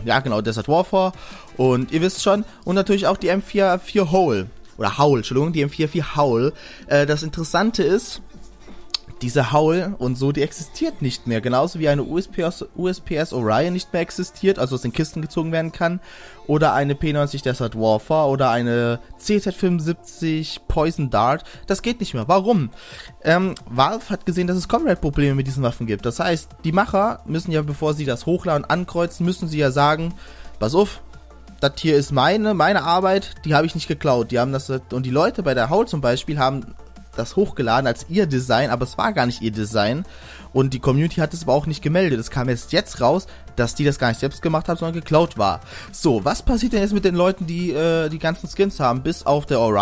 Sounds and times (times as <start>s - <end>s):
Speech: 0.0s - 8.3s, 9.0s - 31.0s, 31.6s - 49.8s
Music: 0.0s - 49.8s.